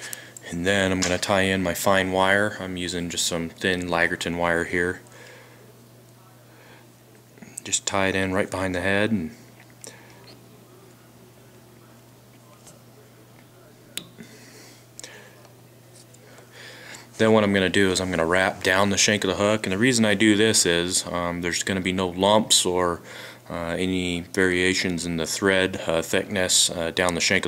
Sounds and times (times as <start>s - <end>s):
Speech: 0.4s - 5.1s, 5.7s - 14.4s, 17.1s - 27.4s.